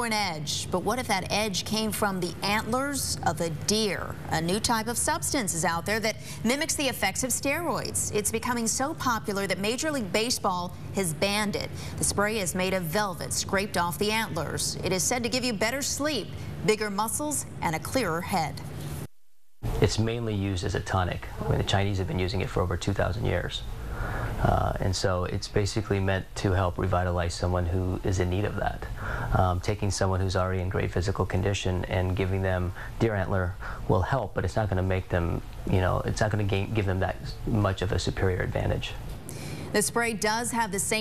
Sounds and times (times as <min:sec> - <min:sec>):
Speech: 0:19.8 - 0:23.6.